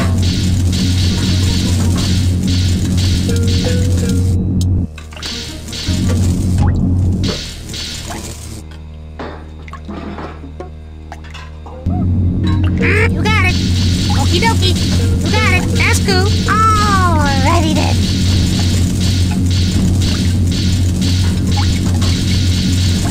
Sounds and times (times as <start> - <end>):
Music: 0.0 - 23.1
Speech: 12.8 - 13.6, 14.2 - 18.0.